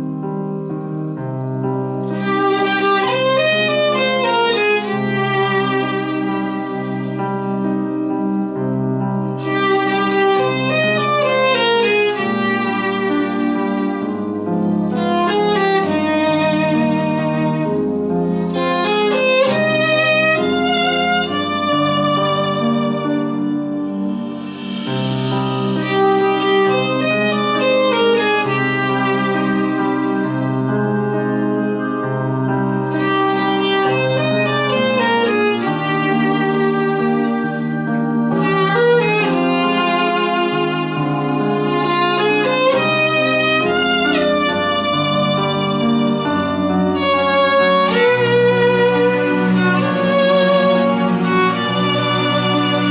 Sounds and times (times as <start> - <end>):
Violin, fiddle: 1.9 - 52.9.